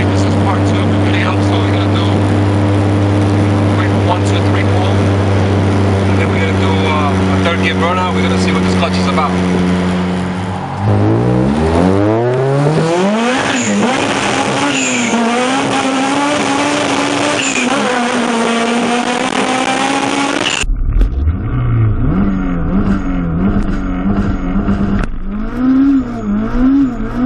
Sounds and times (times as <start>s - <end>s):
Car: 0.0s - 27.2s
Accelerating, revving, vroom: 10.8s - 20.6s, 21.3s - 27.2s.